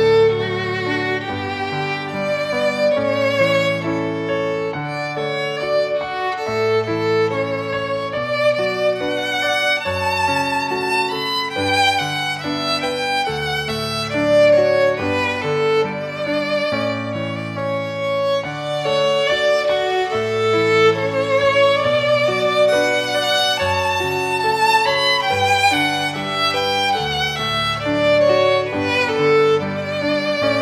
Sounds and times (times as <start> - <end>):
Violin, fiddle: 0.0 - 30.6.